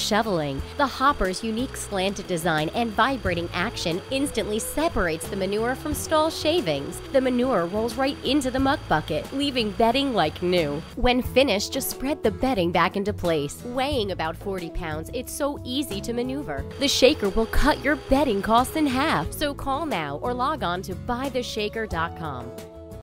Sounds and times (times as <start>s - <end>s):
Speech: 0.0s - 22.5s
Music: 0.0s - 23.0s.